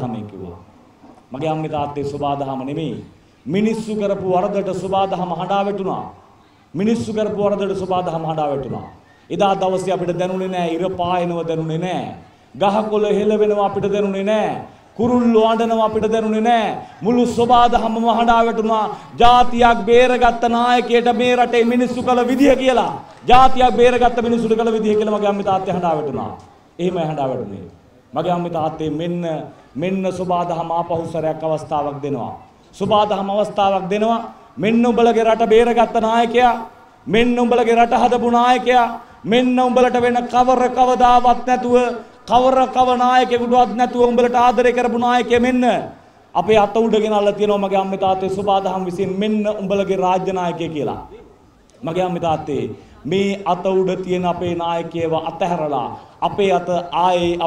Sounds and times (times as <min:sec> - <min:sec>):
Male speech, man speaking: 0:00.0 - 0:00.6, 0:01.3 - 0:06.2, 0:06.8 - 0:57.4
Narration, monologue: 0:00.0 - 0:57.4.